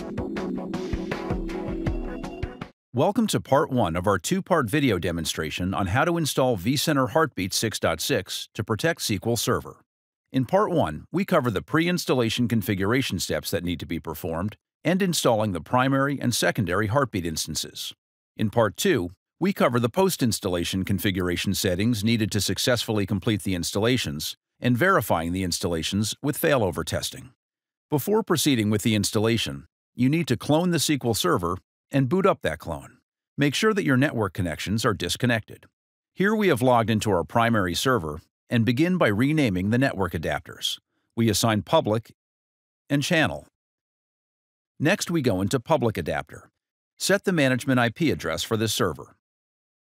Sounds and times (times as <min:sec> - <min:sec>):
Speech: 0:03.0 - 0:09.8, 0:10.4 - 0:42.2, 0:42.9 - 0:43.5, 0:44.8 - 0:49.2.